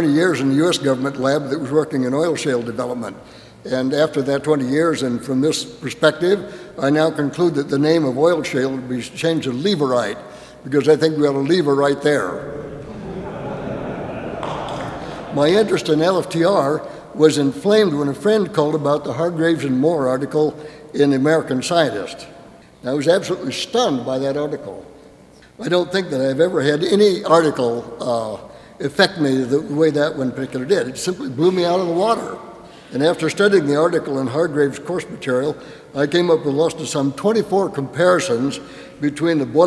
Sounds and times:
Speech: 0.0s - 24.9s, 25.6s - 39.6s.

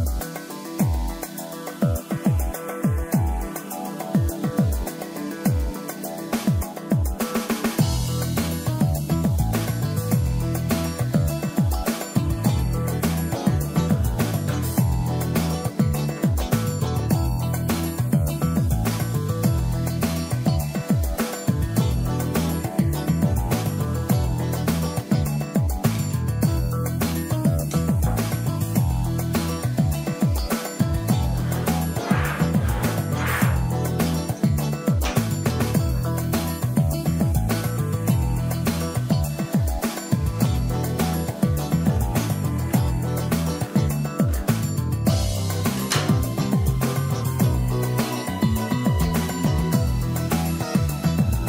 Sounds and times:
Music: 0.0s - 51.4s.

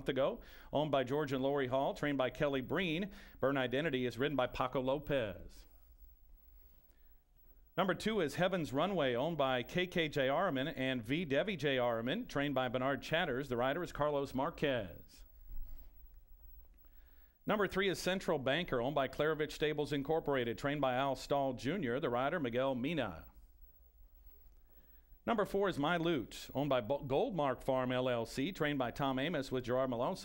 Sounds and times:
Speech: 0.0s - 5.7s, 7.8s - 15.3s, 17.5s - 23.4s, 25.2s - 30.2s.

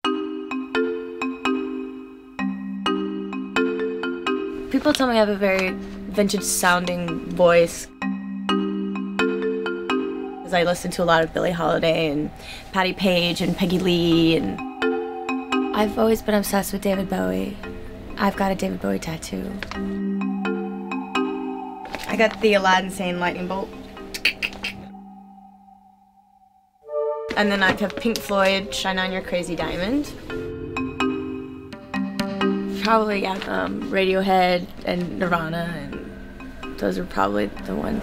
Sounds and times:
Music: 0.1s - 38.0s
Speech: 10.5s - 14.6s, 27.4s - 30.1s, 32.8s - 36.0s, 36.8s - 38.0s.

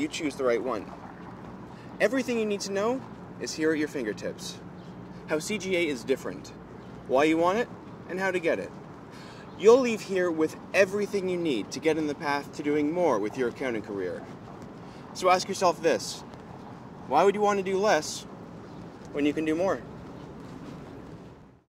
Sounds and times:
Speech: 0.0s - 0.9s, 2.0s - 4.6s, 5.3s - 8.7s, 9.6s - 14.3s, 15.2s - 16.3s, 17.1s - 18.3s, 19.1s - 19.8s
Walk, footsteps: 0.9s - 1.8s, 13.5s - 15.0s, 16.2s - 17.1s, 18.6s - 21.5s.

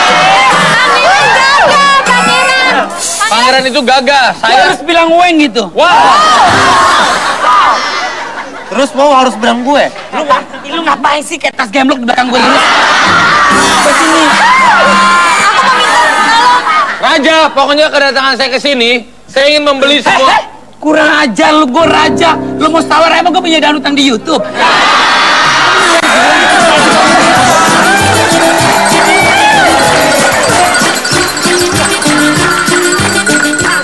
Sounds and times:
Music: 0.0s - 3.2s, 6.4s - 7.2s, 13.0s - 15.1s, 21.8s - 33.8s
Inside, large room or hall: 0.0s - 33.8s.

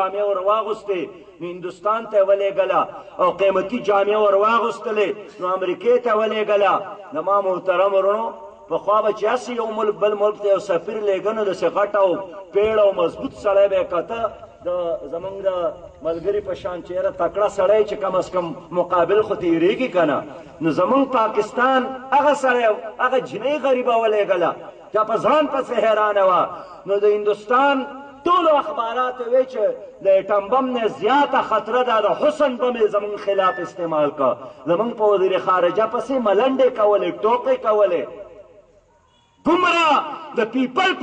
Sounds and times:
Male speech, man speaking: 0.0s - 38.2s, 39.4s - 41.0s
Narration, monologue: 0.0s - 41.0s.

